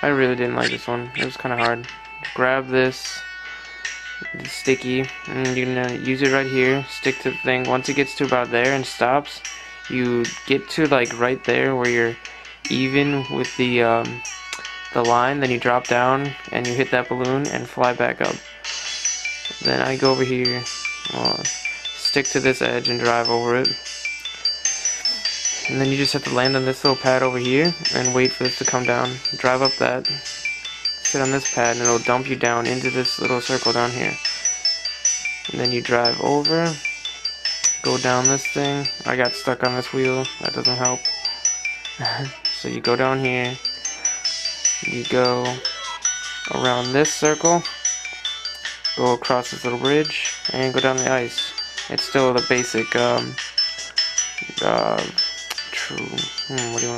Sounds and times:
Speech: 0.0s - 3.2s, 4.2s - 14.2s, 15.0s - 18.4s, 19.6s - 23.8s, 25.6s - 30.2s, 31.2s - 34.2s, 35.5s - 36.8s, 37.9s - 41.0s, 42.0s - 43.6s, 44.8s - 47.7s, 49.0s - 53.4s, 54.4s - 56.9s
Music: 0.0s - 56.9s.

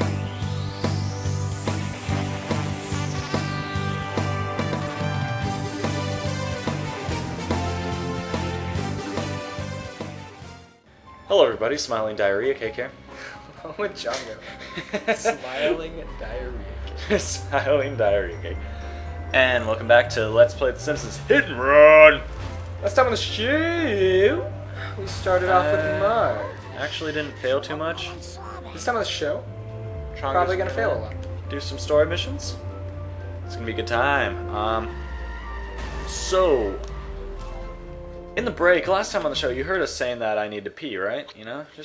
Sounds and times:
Music: 0.0s - 41.8s
Speech: 11.3s - 13.0s, 13.6s - 14.4s, 15.2s - 18.6s, 19.4s - 29.4s, 30.2s - 32.6s, 36.1s - 36.8s, 38.4s - 41.8s.

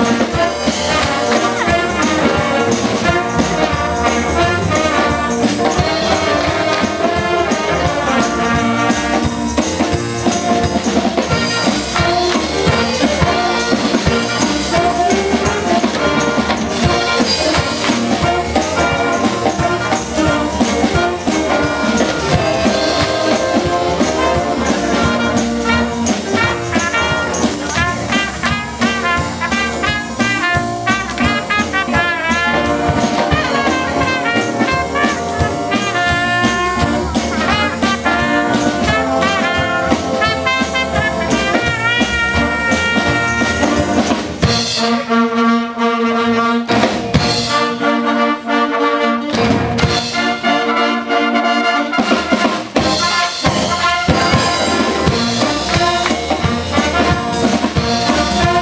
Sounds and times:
Orchestra: 0.0s - 58.6s.

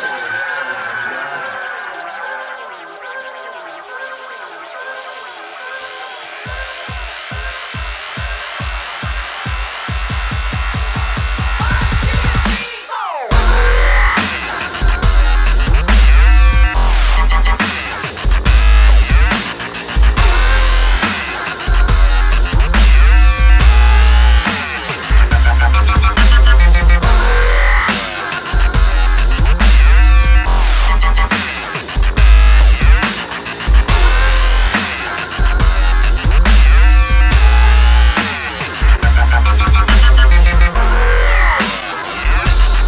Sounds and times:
Dubstep: 0.0s - 42.8s.

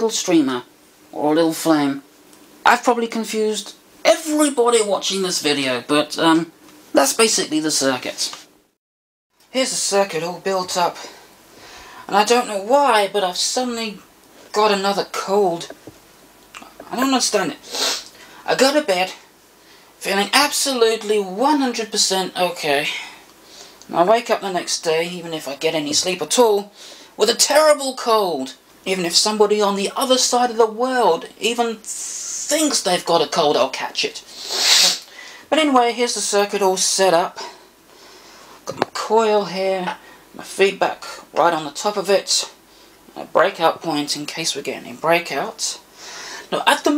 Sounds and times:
Speech: 0.0s - 8.5s, 9.5s - 11.2s, 12.0s - 15.8s, 16.6s - 17.6s, 18.4s - 19.3s, 20.0s - 23.2s, 23.9s - 37.6s, 38.6s - 45.9s, 46.5s - 46.9s
Inside, small room: 0.0s - 46.9s.

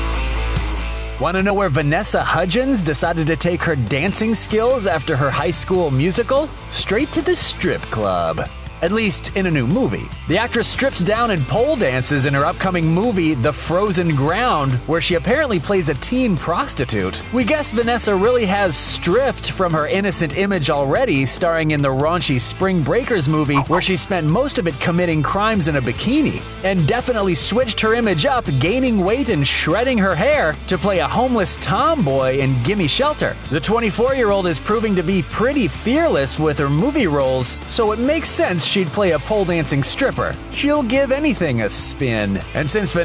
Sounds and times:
Music: 0.0s - 43.0s
Speech: 1.2s - 43.0s.

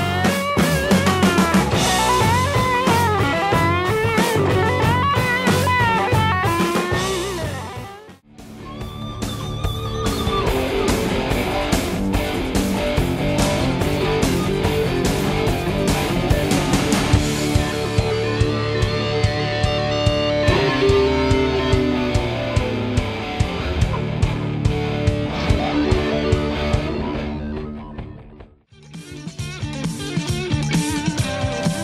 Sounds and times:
Bass guitar: 0.0s - 31.8s.

